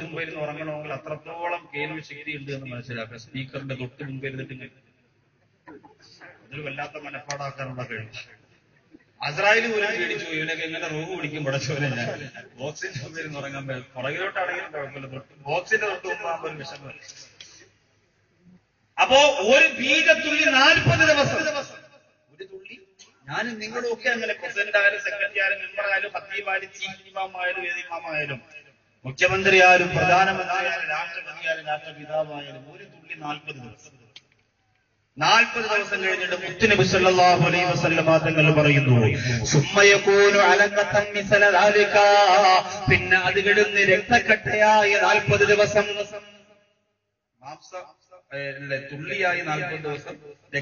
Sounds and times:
Male speech, man speaking: 0:00.0 - 0:04.8, 0:06.0 - 0:08.4, 0:09.2 - 0:17.3, 0:19.0 - 0:34.0, 0:35.2 - 0:46.4, 0:47.4 - 0:50.6
Narration, monologue: 0:00.0 - 0:50.6.

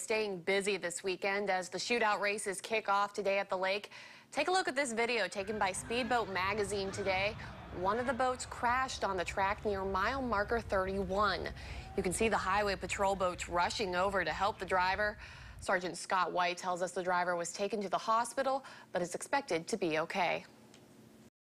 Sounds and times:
Speech: 0:00.0 - 0:20.5.

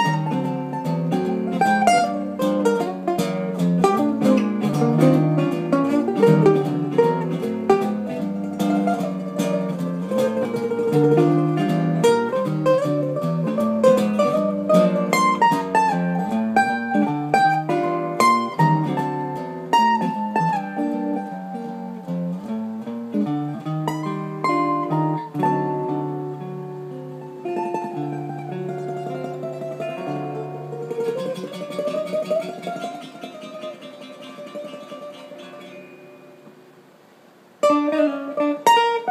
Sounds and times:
Guitar: 0:00.0 - 0:39.1
Mandolin: 0:00.0 - 0:39.1.

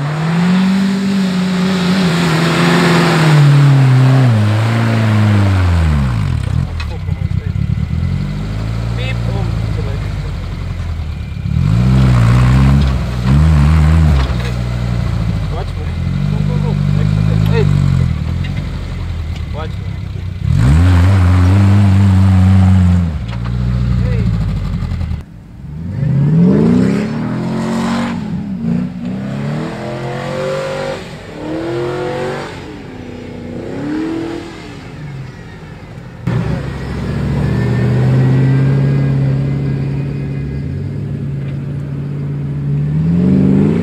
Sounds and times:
Speech: 0:06.8 - 0:07.6, 0:09.0 - 0:10.5, 0:15.5 - 0:17.8, 0:19.5 - 0:20.2, 0:24.0 - 0:24.3.

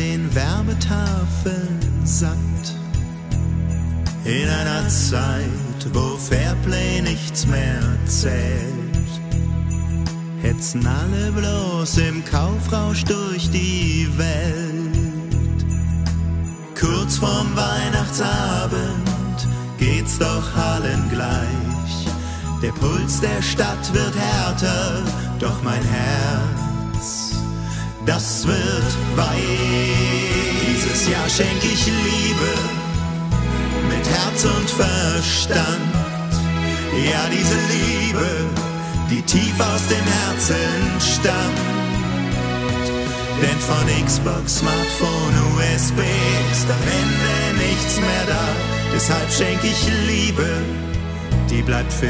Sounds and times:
Music: 0:00.0 - 0:52.1.

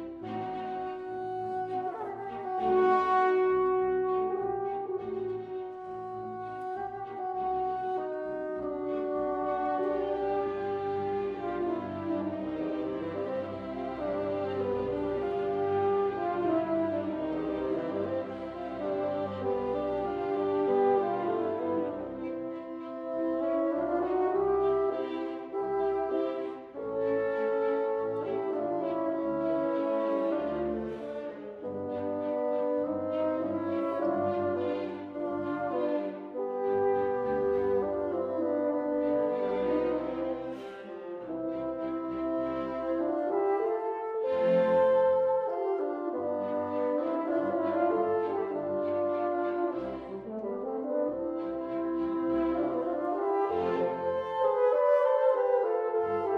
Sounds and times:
French horn: 0:00.0 - 0:56.3
Orchestra: 0:00.0 - 0:56.3
Violin, fiddle: 0:00.0 - 0:56.3.

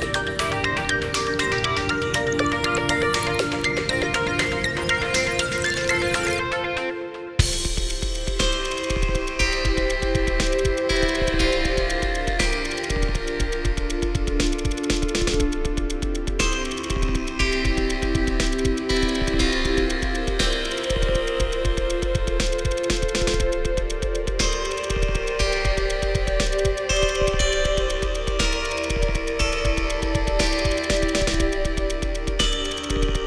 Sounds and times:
Synthesizer: 0:00.0 - 0:33.2.

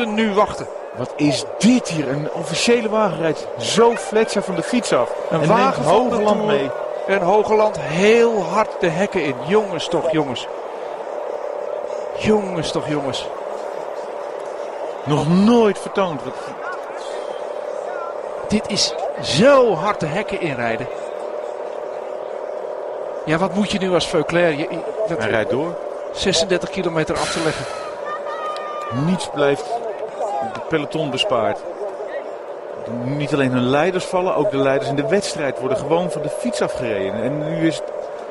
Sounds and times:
Speech: 0:00.0 - 0:10.5, 0:12.2 - 0:13.3, 0:15.1 - 0:17.1, 0:17.9 - 0:20.9, 0:23.3 - 0:27.7, 0:28.9 - 0:32.2, 0:32.8 - 0:37.9
Vehicle: 0:00.0 - 0:38.3.

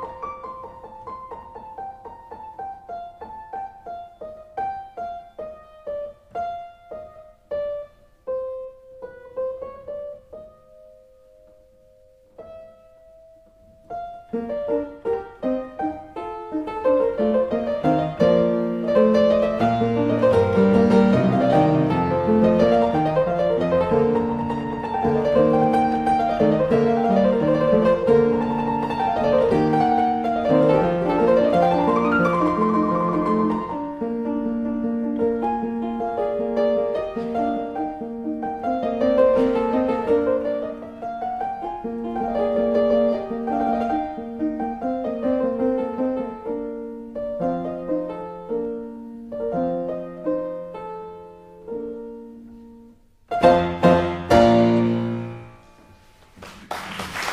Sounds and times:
Piano: 0:00.0 - 0:57.3.

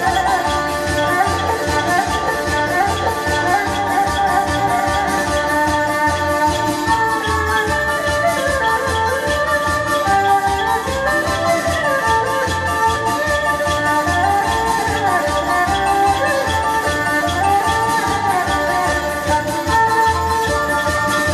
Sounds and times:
Dance music: 0:00.0 - 0:21.3
Traditional music: 0:00.0 - 0:21.3.

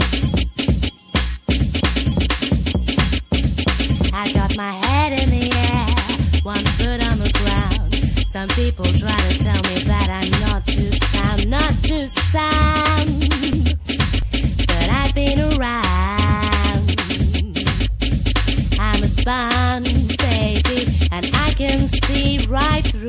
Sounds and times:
Music: 0:00.0 - 0:23.0.

